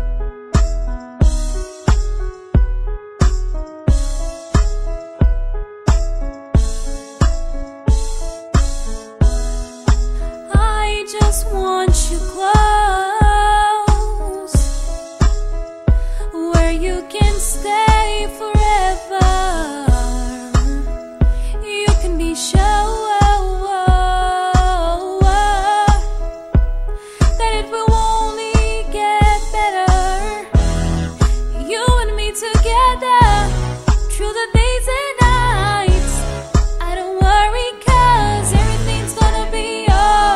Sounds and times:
Music: 0.0s - 40.3s
Female singing: 10.5s - 14.6s, 16.3s - 20.9s, 21.6s - 26.1s, 27.4s - 30.5s, 31.6s - 33.5s, 34.2s - 36.2s, 36.8s - 40.3s.

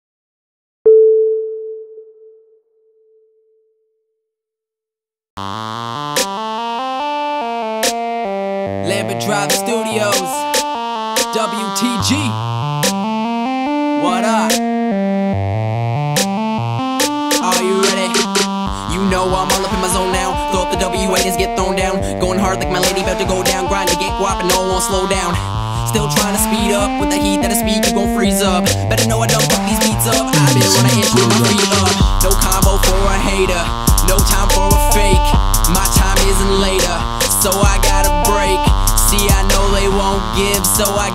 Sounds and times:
Independent music: 15.8s - 41.1s
Rhythm and blues: 16.1s - 41.1s.

